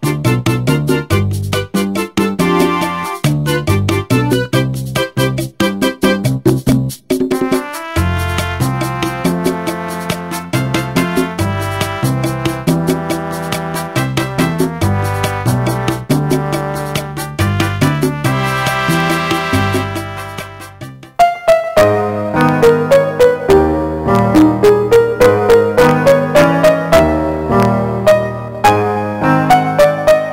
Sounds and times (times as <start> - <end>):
Music: 0.0 - 30.3.